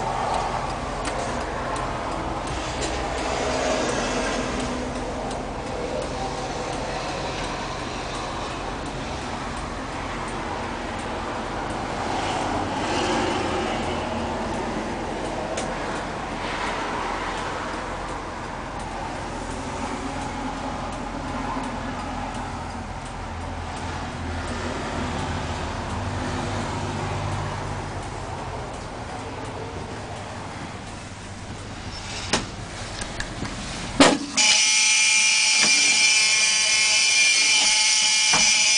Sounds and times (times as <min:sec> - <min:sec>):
Bus: 0:00.0 - 0:38.7.